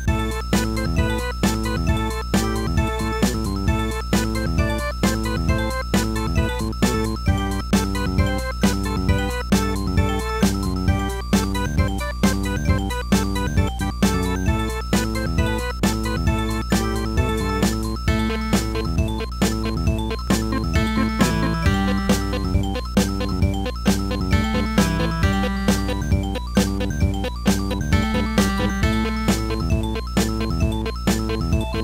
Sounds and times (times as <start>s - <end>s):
Soundtrack music: 0.2s - 31.8s.